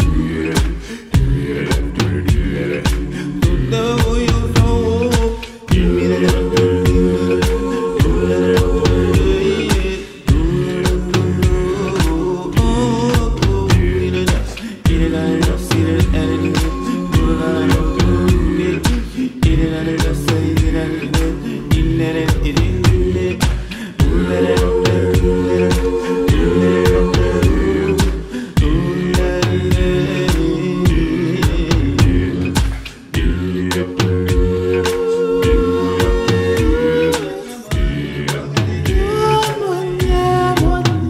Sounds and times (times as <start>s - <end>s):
Reggae: 0.0s - 41.1s.